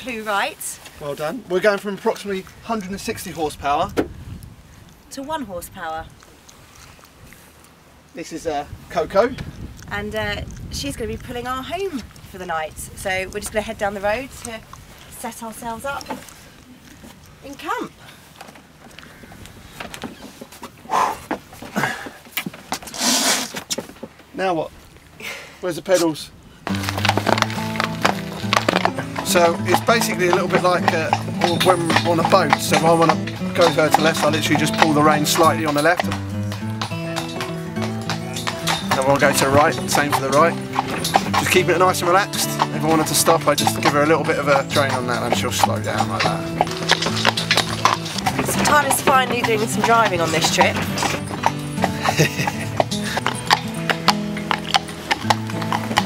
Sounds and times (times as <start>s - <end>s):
Clip-clop: 0.0s - 25.2s, 26.0s - 56.0s
Music: 26.7s - 56.0s.